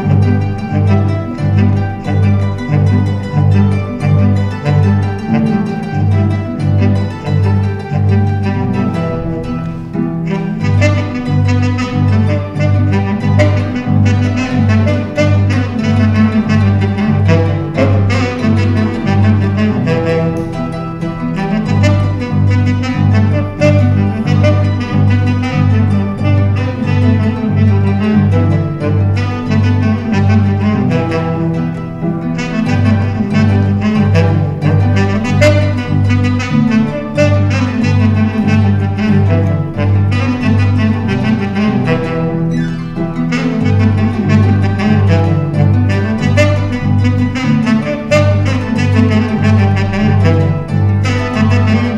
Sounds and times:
Harp: 0.0s - 51.9s
Plucked string instrument: 0.0s - 51.9s
Saxophone: 0.0s - 51.9s.

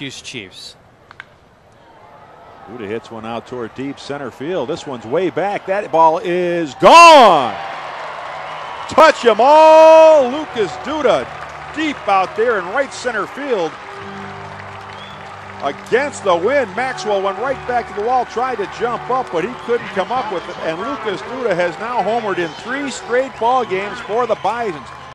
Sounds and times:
Speech: 0.0s - 0.8s, 2.7s - 7.6s, 8.9s - 13.7s, 15.6s - 24.9s
Music: 10.4s - 25.1s.

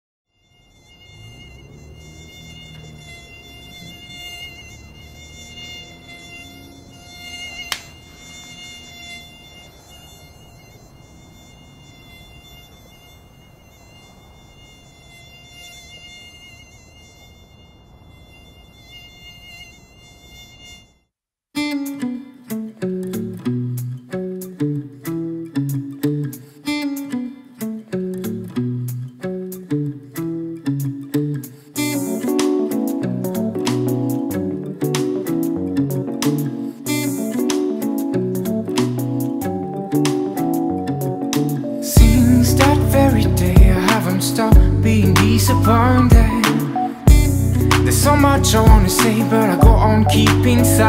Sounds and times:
Fly, housefly: 0.3s - 21.1s, 31.8s - 50.8s
Mosquito: 0.3s - 22.3s, 31.6s - 50.8s.

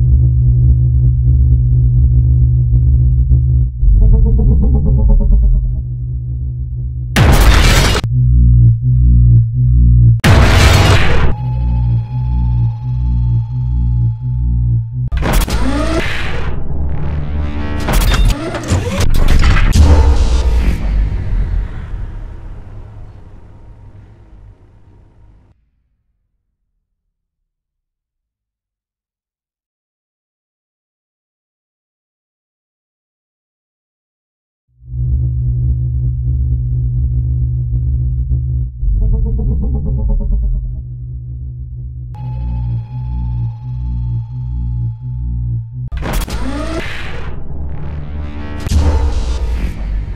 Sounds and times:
Music: 0.0s - 26.0s, 34.8s - 50.1s.

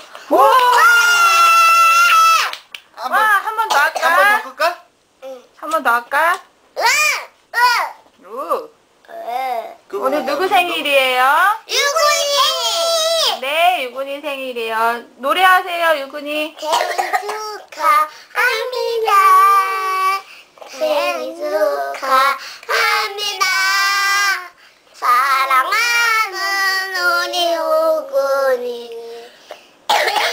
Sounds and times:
Child singing: 16.6s - 29.3s.

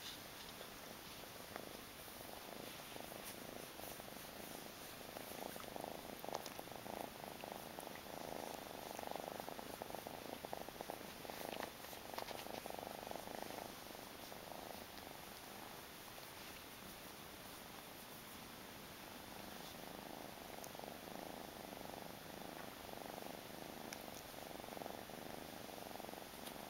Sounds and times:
Inside, small room: 0.0s - 26.6s.

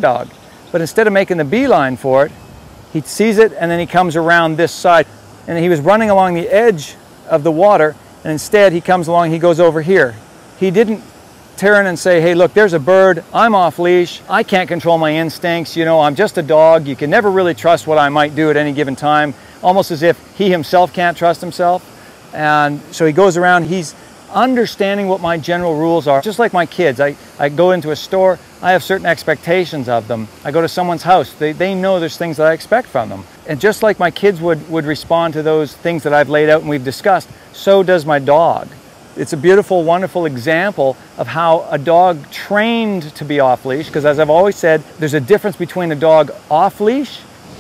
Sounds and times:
Speech: 0.0s - 2.3s, 3.0s - 11.0s, 11.6s - 47.3s.

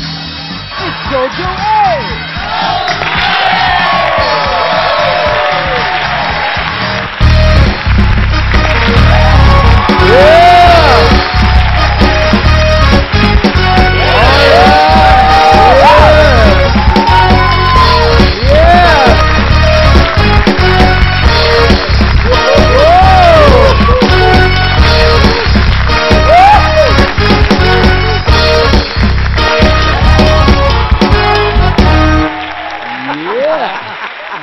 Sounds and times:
Music: 0.0s - 33.6s.

